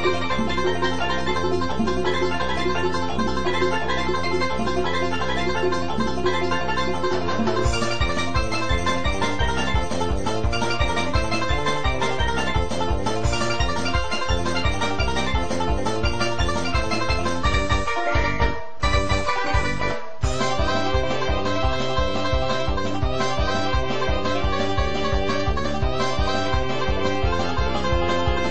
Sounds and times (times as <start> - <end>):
Funny music: 0.0 - 28.5.